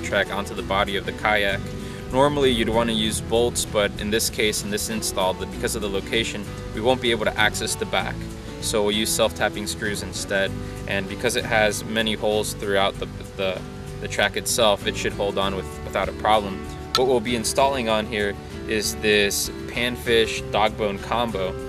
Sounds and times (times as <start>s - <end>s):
Music: 0.0s - 21.6s
Speech: 0.0s - 21.6s.